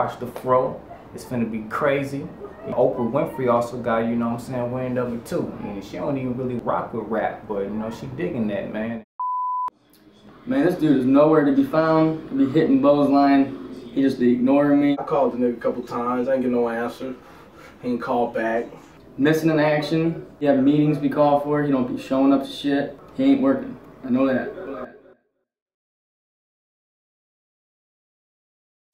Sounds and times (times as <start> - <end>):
Speech: 0.0 - 9.0, 10.5 - 17.2.